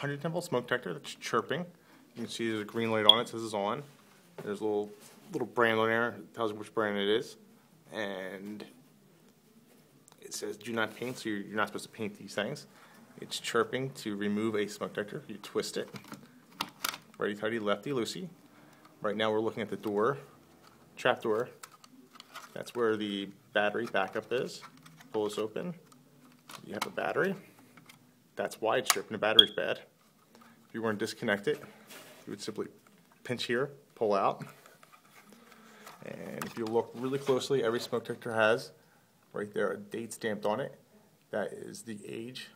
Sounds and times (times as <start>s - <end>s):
Speech: 0.0s - 8.8s, 10.2s - 16.0s, 17.2s - 18.4s, 19.0s - 20.3s, 21.0s - 21.6s, 22.6s - 25.8s, 26.6s - 27.5s, 28.4s - 29.9s, 30.7s - 31.7s, 32.3s - 34.6s, 36.0s - 42.5s.